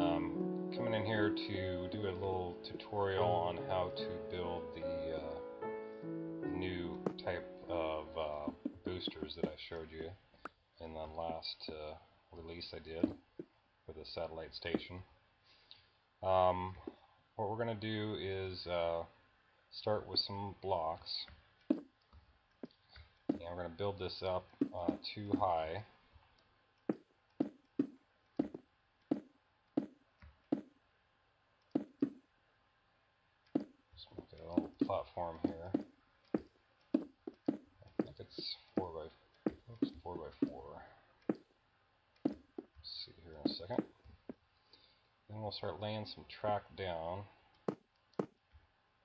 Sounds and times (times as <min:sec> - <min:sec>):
Speech: 0:00.0 - 0:05.4, 0:06.5 - 0:10.2, 0:10.8 - 0:13.2, 0:13.9 - 0:15.1, 0:16.2 - 0:21.3, 0:23.4 - 0:26.0, 0:34.0 - 0:35.8, 0:38.0 - 0:41.1, 0:42.8 - 0:43.9, 0:45.3 - 0:47.4.